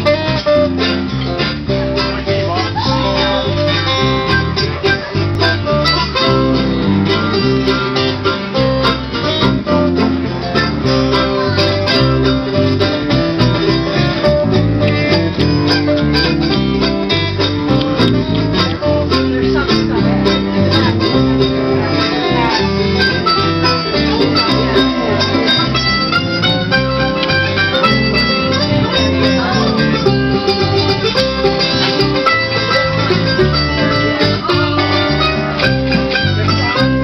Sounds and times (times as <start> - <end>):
Gospel music: 0.0 - 37.0.